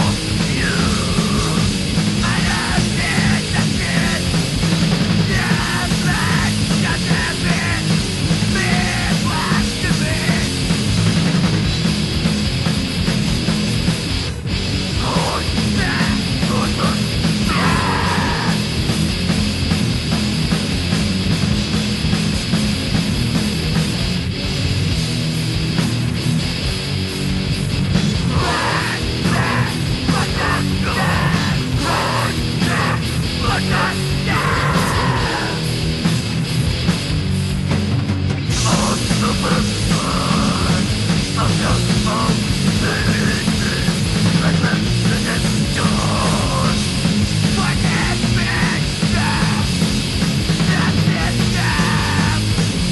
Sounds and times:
Music: 0.0s - 52.9s.

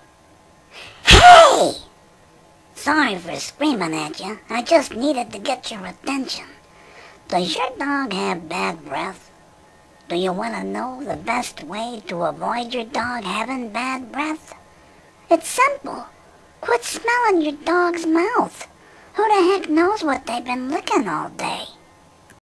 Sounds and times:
Speech: 2.8s - 6.6s, 7.3s - 9.3s, 10.1s - 14.6s, 15.3s - 21.8s.

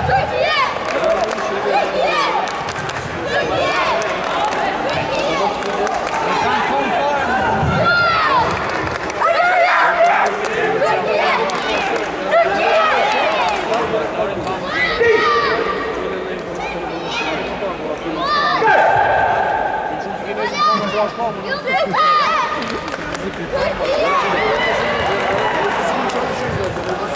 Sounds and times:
Speech: 9.2s - 27.1s.

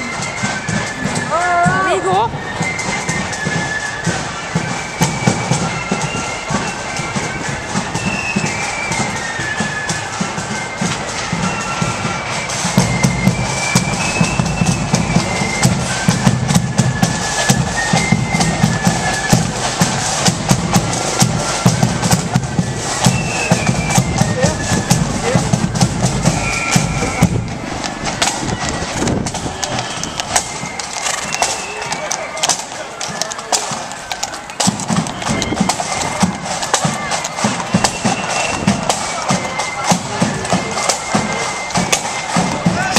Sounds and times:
Music: 0.0s - 42.9s
Walk, footsteps: 13.8s - 42.9s.

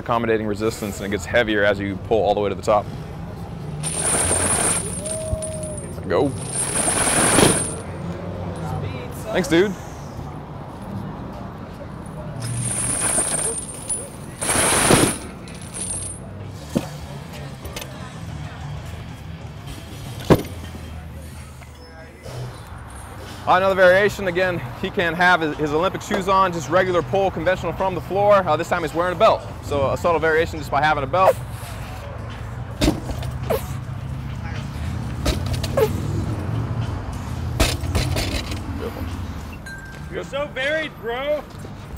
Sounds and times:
Outside, urban or manmade: 0.0s - 41.9s.

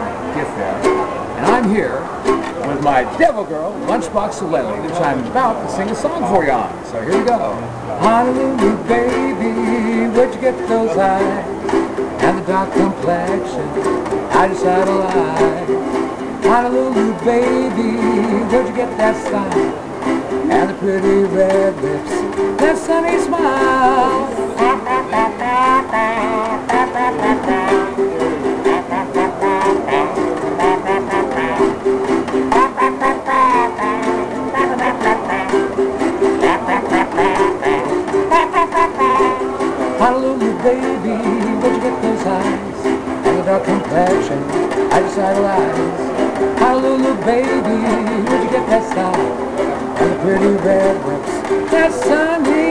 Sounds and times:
Ukulele: 0.0s - 52.7s.

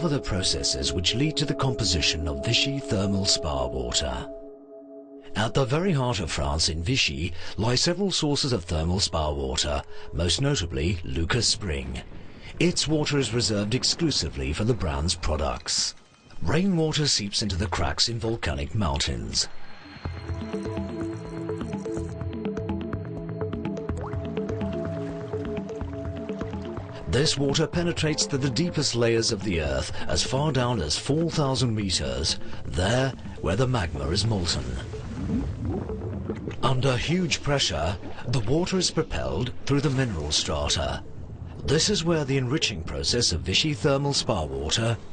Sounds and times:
Speech: 0.0s - 4.3s, 5.3s - 19.5s, 27.1s - 34.9s, 36.6s - 41.0s, 41.6s - 45.0s
Music: 0.0s - 12.6s, 14.0s - 36.7s.

